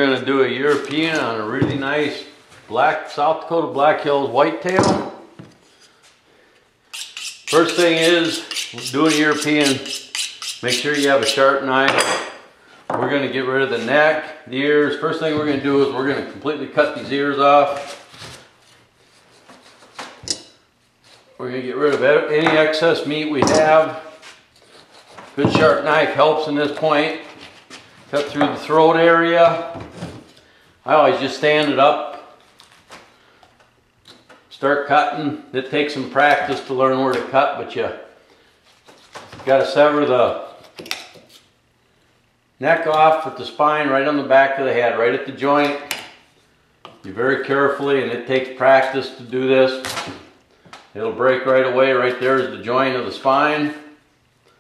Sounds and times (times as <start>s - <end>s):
Speech: 0.0s - 5.1s, 7.5s - 9.9s, 10.6s - 12.1s, 12.9s - 18.0s, 21.4s - 24.2s, 25.4s - 27.3s, 28.1s - 29.8s, 30.9s - 32.3s, 34.5s - 38.2s, 39.4s - 40.6s, 42.6s - 45.9s, 47.0s - 50.0s, 51.0s - 53.9s.